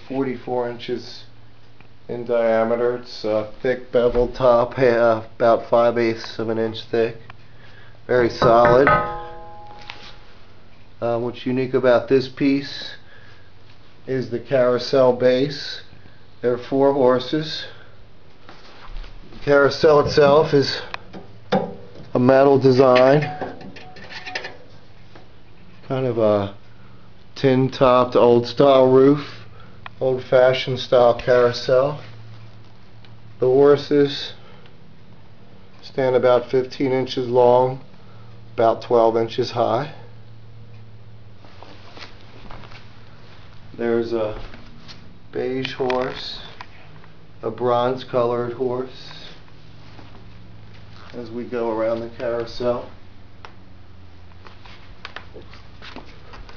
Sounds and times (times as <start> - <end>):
Speech: 0.0 - 1.4, 2.1 - 7.2, 8.1 - 8.9, 11.0 - 13.0, 14.0 - 17.8, 19.4 - 20.9, 22.1 - 23.3, 25.8 - 26.6, 27.4 - 29.4, 30.0 - 32.1, 33.4 - 34.4, 35.8 - 37.9, 38.6 - 40.1, 43.7 - 44.5, 45.3 - 46.6, 47.4 - 49.4, 51.1 - 53.0.